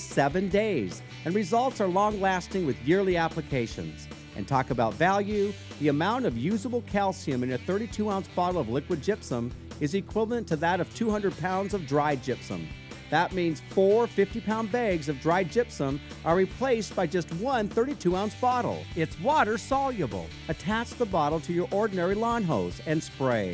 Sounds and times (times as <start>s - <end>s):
Music: 0.0s - 23.5s
Speech: 0.0s - 23.5s.